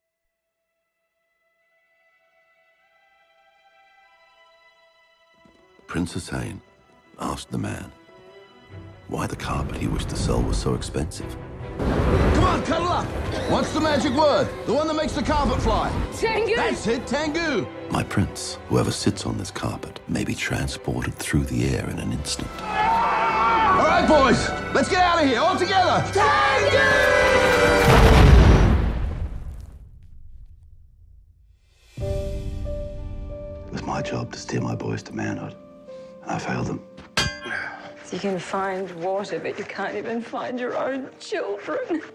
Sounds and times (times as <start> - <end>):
Music: 0.3 - 28.6, 31.7 - 42.1.